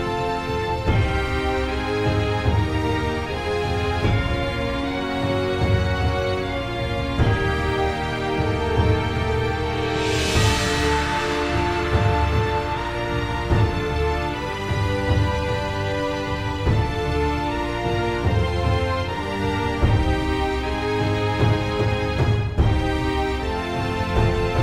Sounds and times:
Independent music: 0.0s - 24.6s
Soundtrack music: 0.0s - 24.6s.

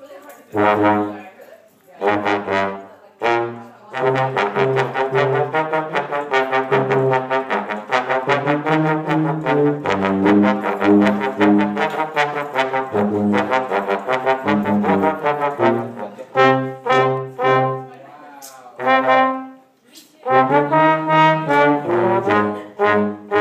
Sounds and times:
Brass instrument: 0.5s - 1.4s, 2.0s - 18.0s, 18.8s - 23.4s.

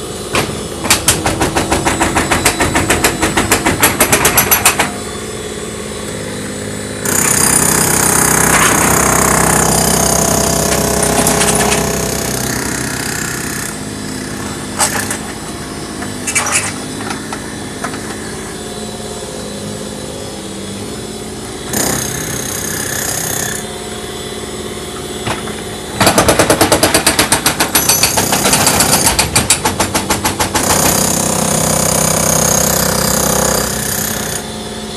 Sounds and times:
Engine: 0.0s - 34.9s
Tools: 0.3s - 5.0s, 10.7s - 12.6s, 14.4s - 18.3s, 25.2s - 31.0s.

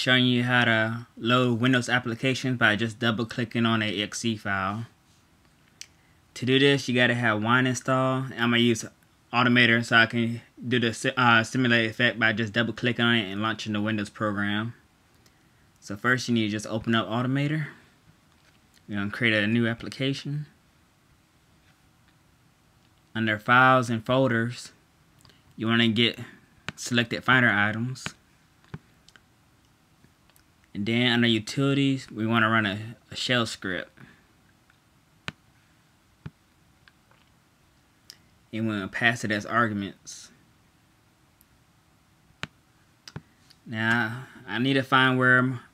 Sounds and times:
Speech: 0.0s - 4.9s, 6.4s - 14.8s, 15.8s - 17.8s, 18.9s - 20.6s, 23.1s - 24.8s, 25.6s - 28.2s, 30.7s - 34.0s, 38.5s - 40.4s, 43.7s - 45.7s.

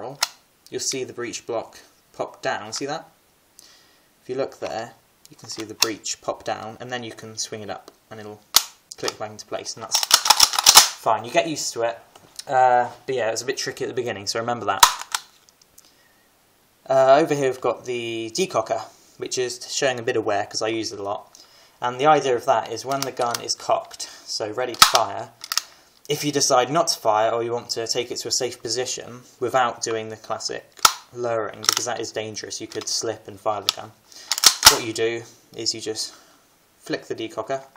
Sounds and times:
Speech: 0.0s - 3.2s, 4.2s - 10.0s, 11.0s - 14.9s, 16.8s - 25.4s, 26.1s - 34.0s, 34.6s - 36.2s, 36.8s - 37.7s
Inside, small room: 0.0s - 37.7s.

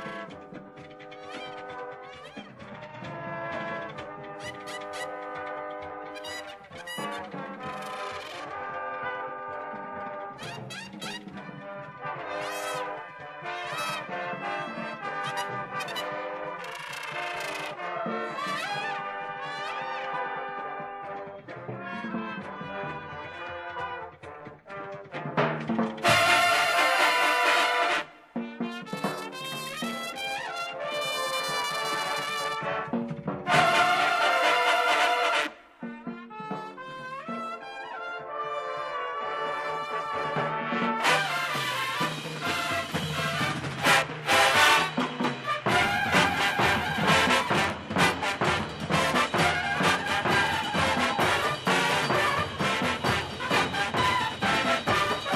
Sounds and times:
Music: 0.0s - 55.3s.

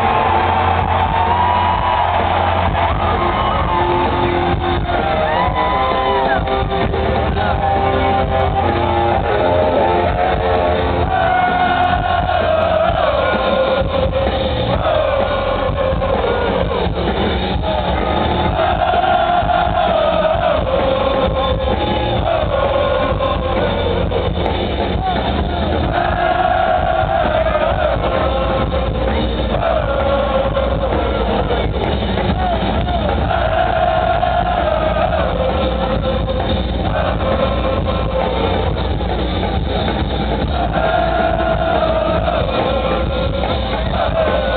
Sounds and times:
Music: 0.0s - 44.5s.

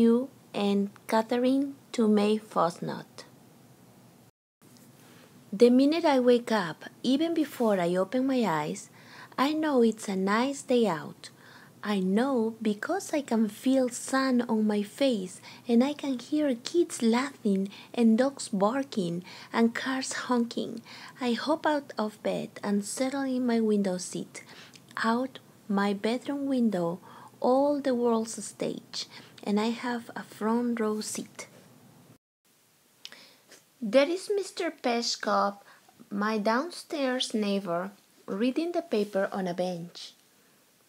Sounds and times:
Speech: 0.0s - 3.3s, 5.6s - 31.5s, 33.8s - 40.2s.

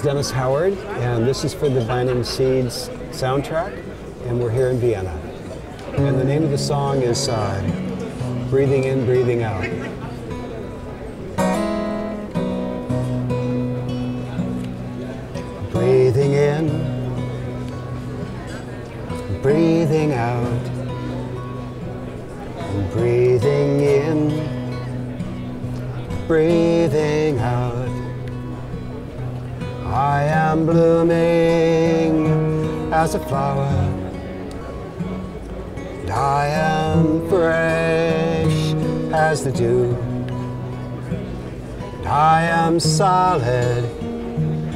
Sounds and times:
Music: 5.9s - 44.7s.

